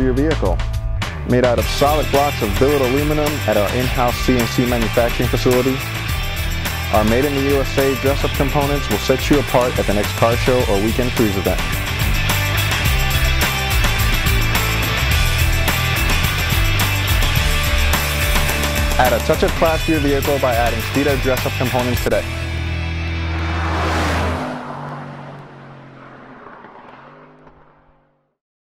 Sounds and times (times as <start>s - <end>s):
Speech: 0.0s - 0.6s, 1.2s - 5.8s, 6.9s - 11.7s, 19.0s - 22.3s
Music: 0.0s - 23.4s
Car: 0.0s - 28.4s.